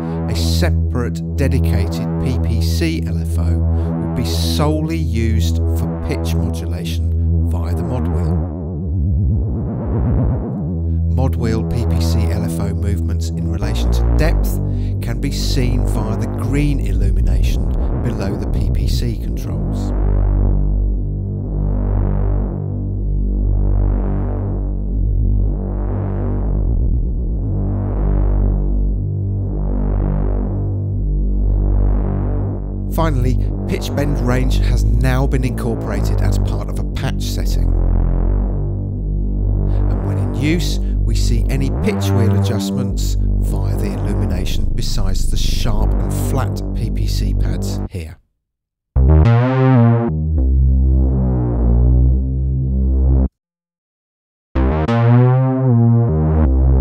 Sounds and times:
Synthesizer: 0.0 - 48.0, 49.0 - 53.3, 54.6 - 56.8
Speech: 0.3 - 8.4, 11.1 - 19.9, 32.9 - 37.8, 39.7 - 48.2.

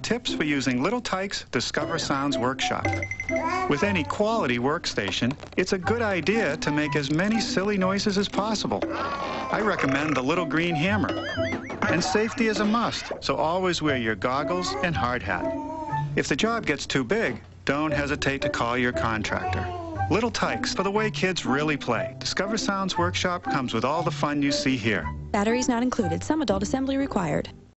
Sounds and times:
Speech: 0.0 - 2.8, 3.7 - 8.9, 9.5 - 11.1, 11.9 - 15.5, 16.2 - 27.5
Music: 0.0 - 27.7.

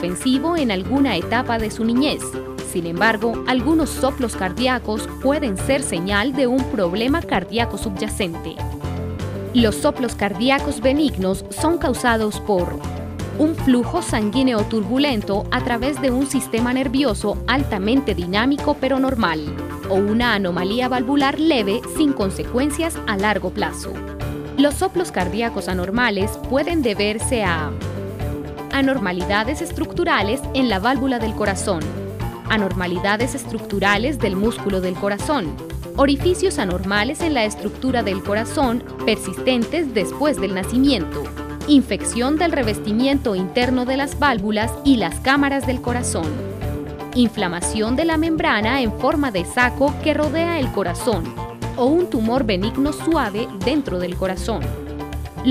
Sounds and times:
Speech: 0.0 - 8.6, 9.6 - 12.8, 13.4 - 24.0, 24.6 - 27.7, 28.7 - 31.9, 32.5 - 46.4, 47.2 - 54.7
Music: 0.0 - 55.5.

